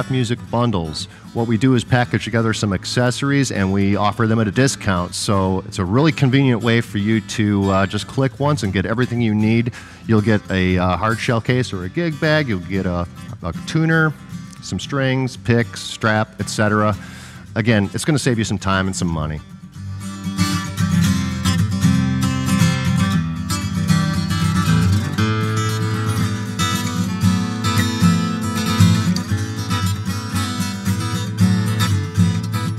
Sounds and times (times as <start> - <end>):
Speech: 0.0 - 19.4
Music: 0.0 - 32.7.